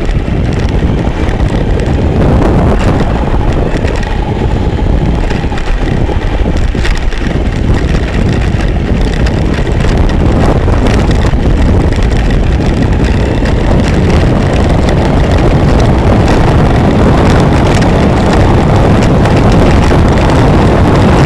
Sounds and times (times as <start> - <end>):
Car: 0.0 - 21.2.